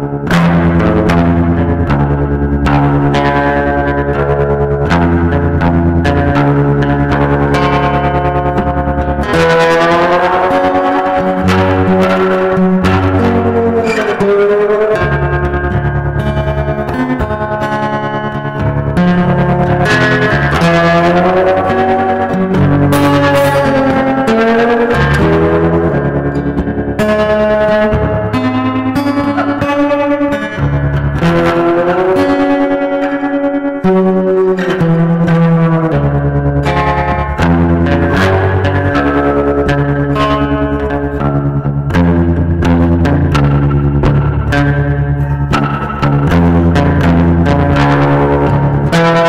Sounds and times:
Blues: 0.0 - 49.2.

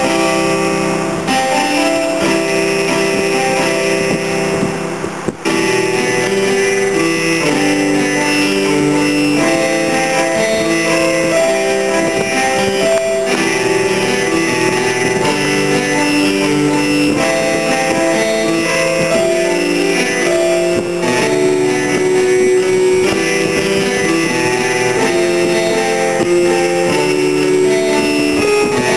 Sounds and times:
Music: 0.0 - 28.9.

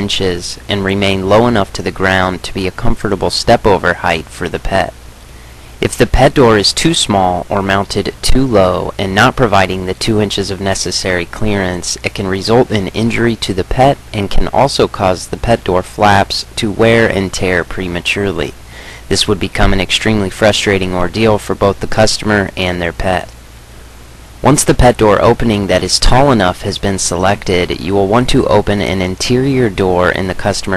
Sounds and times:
Speech: 0.0 - 5.0, 5.8 - 23.4, 24.4 - 30.7.

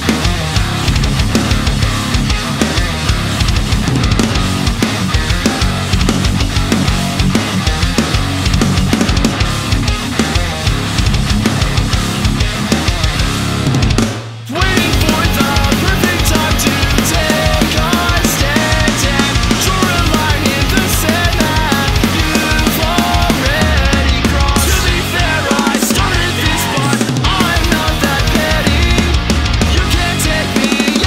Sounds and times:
Pop music: 14.5 - 31.0.

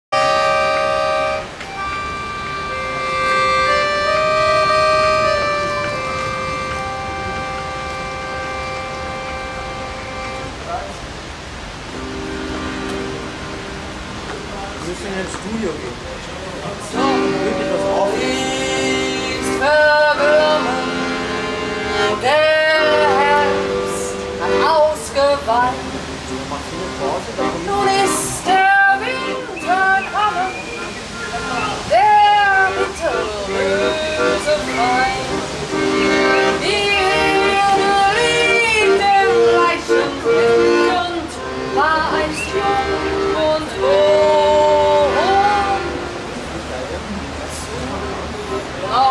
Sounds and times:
Accordion: 0.1 - 11.0, 11.6 - 15.8, 16.4 - 49.1.

